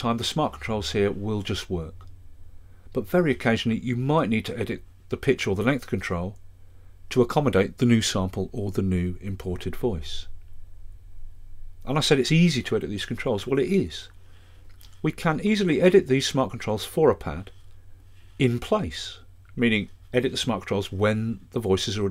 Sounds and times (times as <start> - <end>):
Speech: 0.0 - 2.0, 2.9 - 6.4, 7.1 - 10.3, 11.8 - 14.2, 15.0 - 17.6, 18.4 - 22.1.